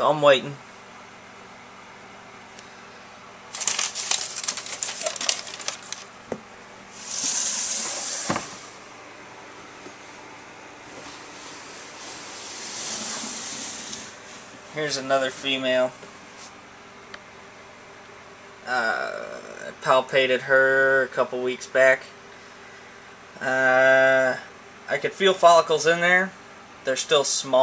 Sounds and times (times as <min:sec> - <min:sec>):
Hiss: 0:07.0 - 0:08.8, 0:12.1 - 0:14.2.